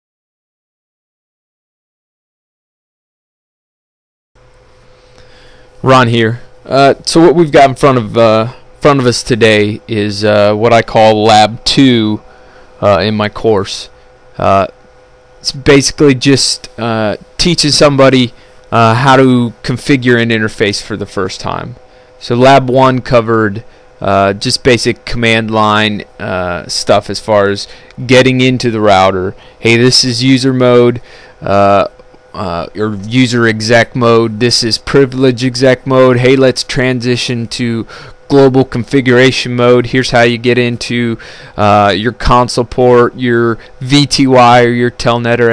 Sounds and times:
Speech: 5.8 - 12.2, 12.8 - 14.8, 15.4 - 45.5.

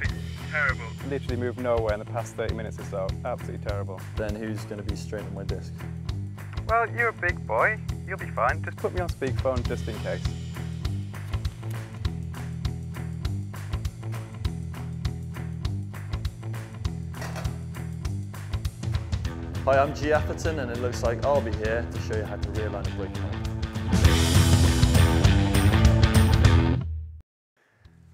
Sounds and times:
Speech: 0.0 - 5.7, 6.6 - 10.2, 19.7 - 23.4
Music: 0.0 - 28.1.

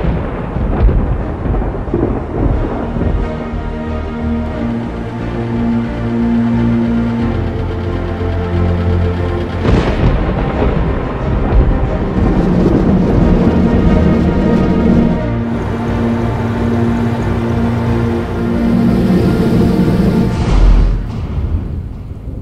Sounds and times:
Music: 0.0 - 22.4.

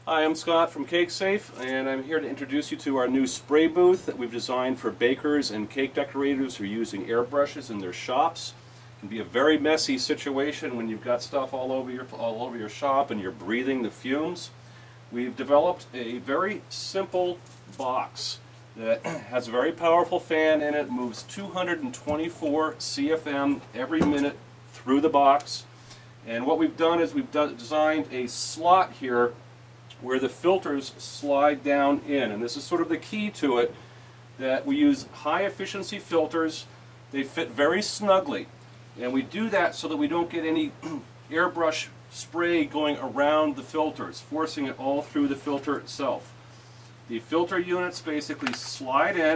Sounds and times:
Speech: 0.0 - 33.8, 34.4 - 46.4, 47.1 - 49.3.

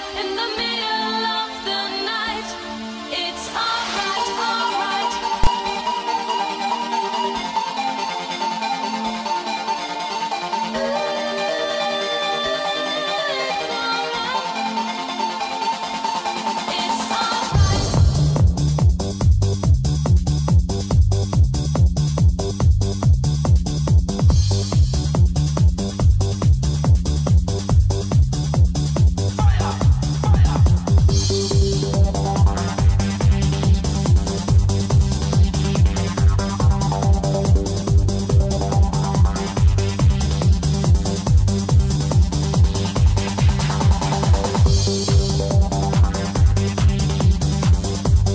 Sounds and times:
Techno: 0.0 - 48.3.

